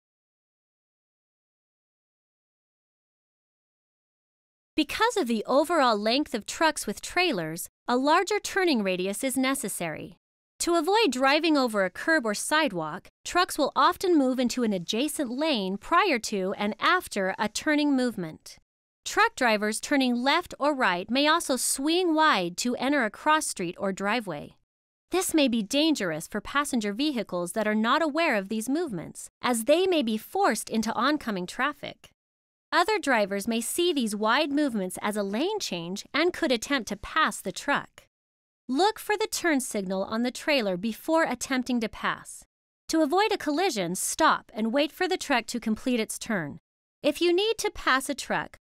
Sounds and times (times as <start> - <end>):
Speech: 4.8 - 32.1, 32.8 - 38.1, 38.7 - 48.6.